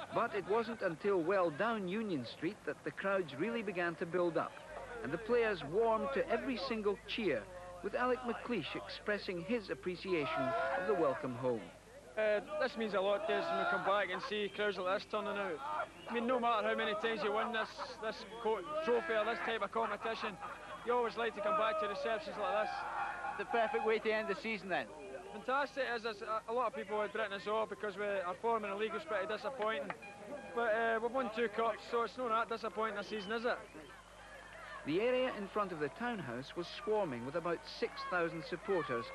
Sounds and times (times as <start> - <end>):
Speech: 0.0 - 22.8.